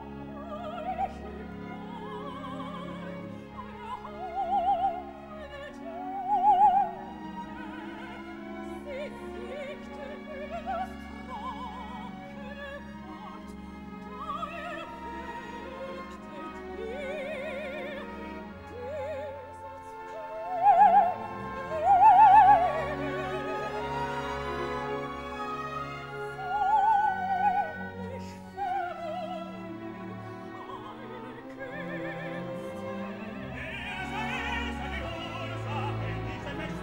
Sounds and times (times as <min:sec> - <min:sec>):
Opera: 0:00.0 - 0:36.8.